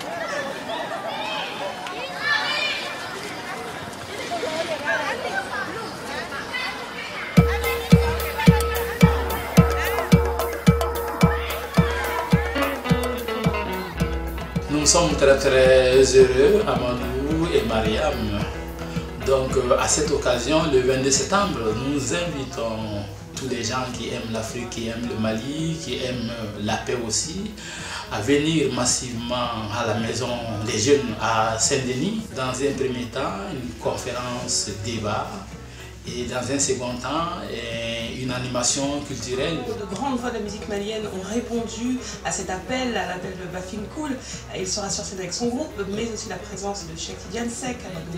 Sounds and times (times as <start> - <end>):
Music: 7.4 - 48.1
Speech: 14.7 - 18.5, 19.2 - 48.1.